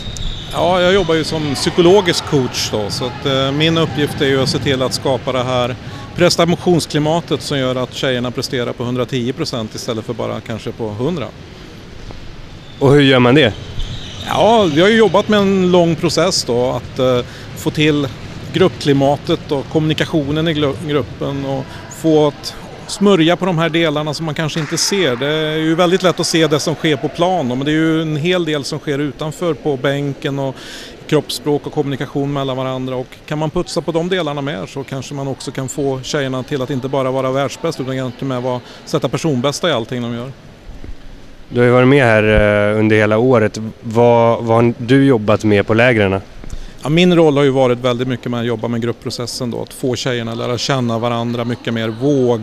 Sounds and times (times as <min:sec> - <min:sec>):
Speech: 0:00.6 - 0:11.3, 0:12.8 - 0:13.6, 0:14.3 - 0:40.4, 0:41.5 - 0:46.2.